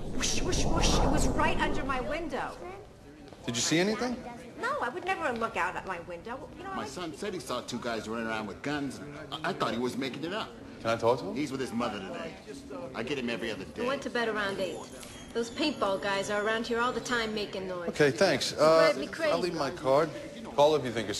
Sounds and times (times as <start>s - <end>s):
Female speech, woman speaking: 0.3s - 2.9s, 4.0s - 7.0s, 13.8s - 18.0s, 18.6s - 19.7s.